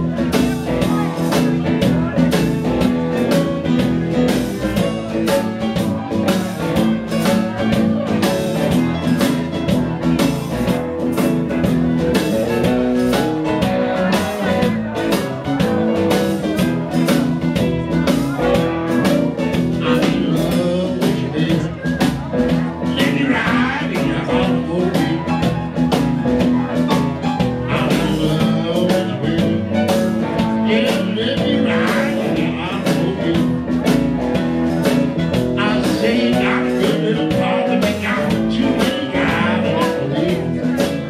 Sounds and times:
Music: 0.0s - 41.0s
Speech: 0.0s - 41.0s.

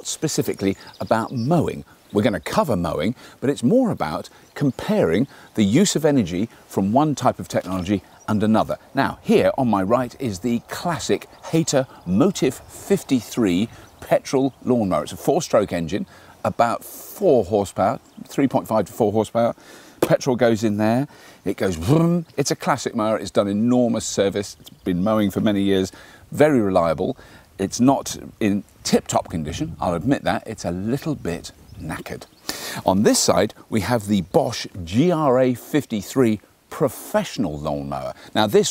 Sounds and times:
Speech: 0.0s - 38.7s.

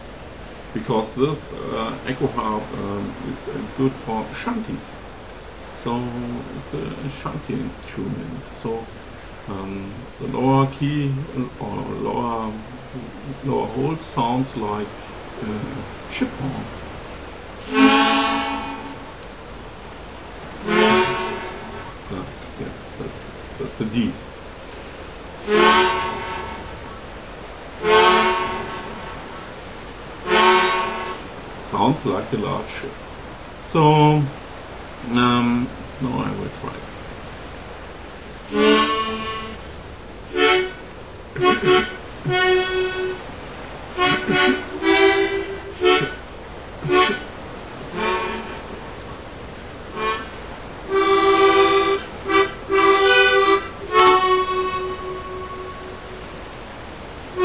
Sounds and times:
Speech: 0.8s - 5.0s, 5.8s - 8.9s, 9.5s - 16.7s, 22.1s - 24.2s, 31.6s - 33.0s, 33.6s - 34.4s, 35.0s - 36.8s
Harmonica: 17.6s - 19.1s, 20.6s - 24.1s, 25.3s - 27.0s, 27.7s - 29.4s, 30.2s - 31.3s, 38.5s - 39.6s, 40.3s - 43.3s, 43.9s - 49.1s, 49.9s - 56.3s.

